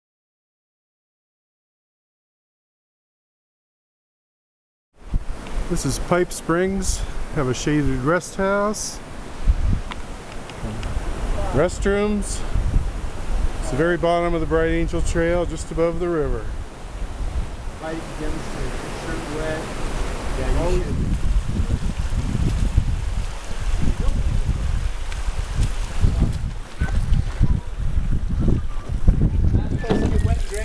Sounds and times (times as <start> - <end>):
Outside, rural or natural: 4.9 - 30.6
Rustling leaves: 5.0 - 30.6
Speech: 5.7 - 9.0, 10.6 - 12.4, 13.6 - 16.5, 20.4 - 21.0, 29.5 - 30.6.